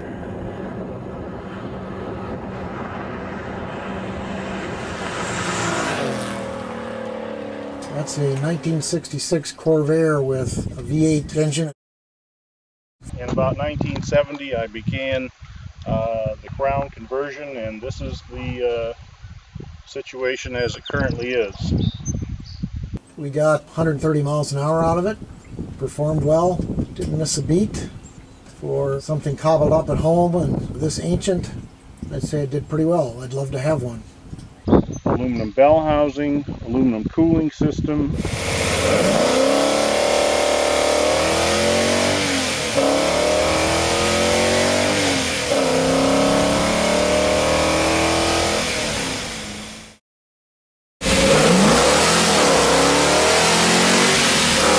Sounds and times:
Speech: 7.8 - 11.8, 13.1 - 19.0, 19.9 - 21.8, 23.2 - 25.2, 25.8 - 27.9, 28.6 - 34.0, 35.2 - 38.2.

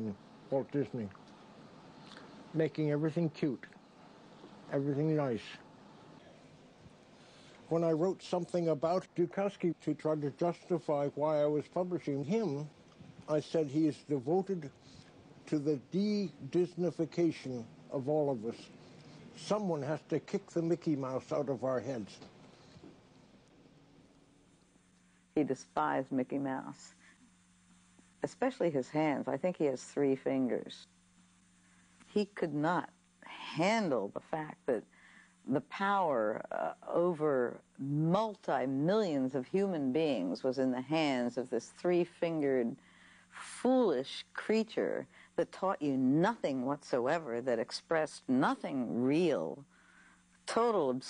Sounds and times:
Speech: 4.7 - 5.6, 19.4 - 22.2, 28.2 - 30.9, 35.5 - 42.8, 43.4 - 49.6, 50.5 - 51.0.

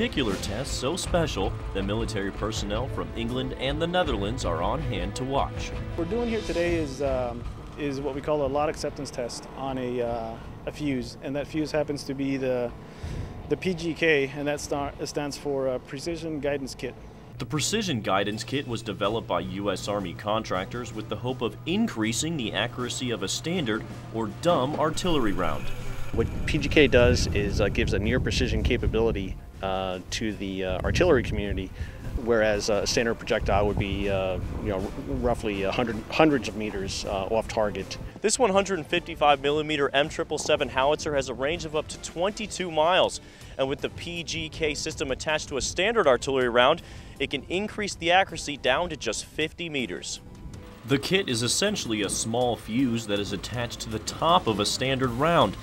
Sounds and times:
Speech: 0.0 - 12.7, 13.5 - 50.2, 50.8 - 55.6
Outside, rural or natural: 0.0 - 55.6.

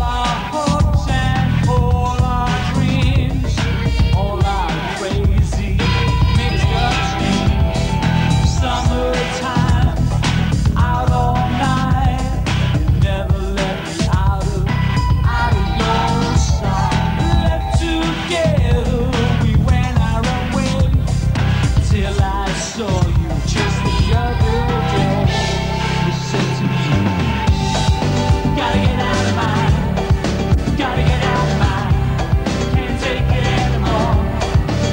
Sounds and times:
Independent music: 0.0 - 34.9
Progressive rock: 0.0 - 34.9
Punk rock: 0.0 - 34.9
Song: 0.1 - 34.9.

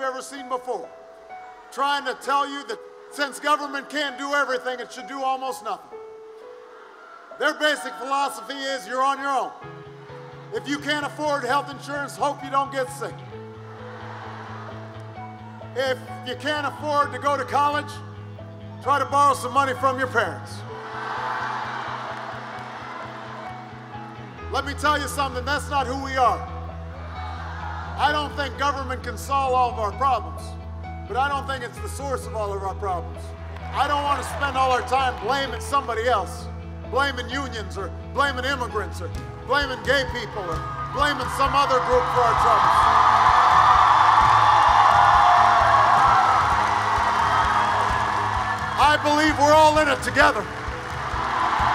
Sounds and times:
Music: 0.0 - 51.7
Speech: 1.7 - 5.8, 7.4 - 9.5, 10.6 - 13.2, 15.8 - 18.0, 18.8 - 20.6, 24.6 - 26.5, 28.0 - 42.7, 48.8 - 50.4.

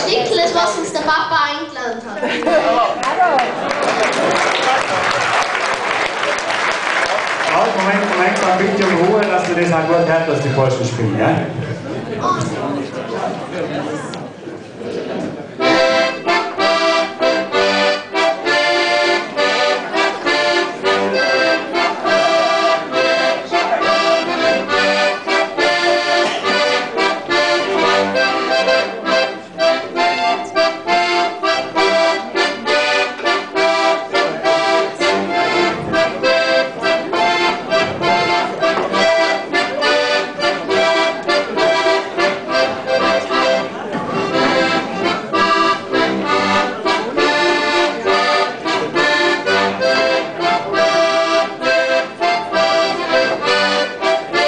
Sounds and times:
Accordion: 0.0 - 3.0, 4.0 - 12.0, 15.6 - 54.4.

